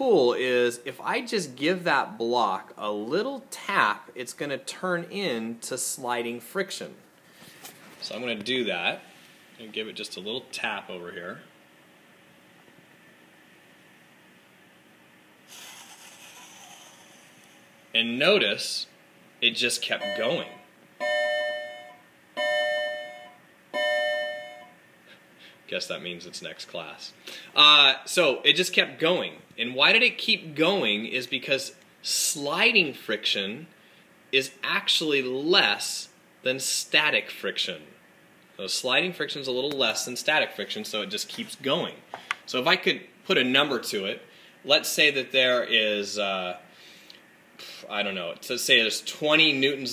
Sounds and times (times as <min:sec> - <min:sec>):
Speech: 0:00.0 - 0:07.0, 0:08.0 - 0:11.5, 0:18.0 - 0:20.6, 0:25.7 - 0:33.7, 0:34.4 - 0:38.0, 0:38.6 - 0:46.6, 0:47.6 - 0:49.9.